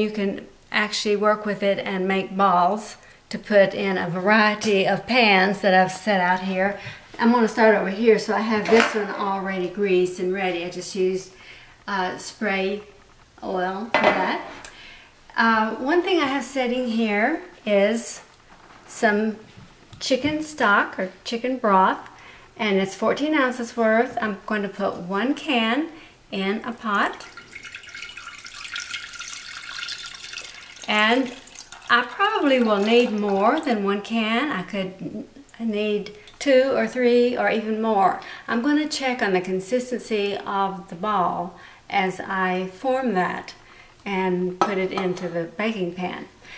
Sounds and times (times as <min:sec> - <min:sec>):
Speech: 0:00.0 - 0:14.6, 0:15.3 - 0:18.3, 0:18.9 - 0:19.4, 0:20.0 - 0:27.2, 0:30.9 - 0:46.4
Inside, small room: 0:00.0 - 0:46.5.